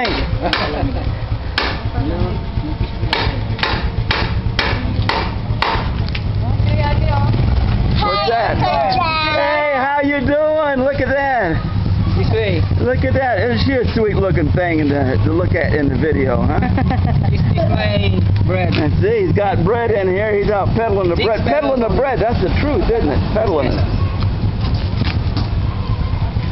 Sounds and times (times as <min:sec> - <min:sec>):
Outside, urban or manmade: 0:00.0 - 0:26.5.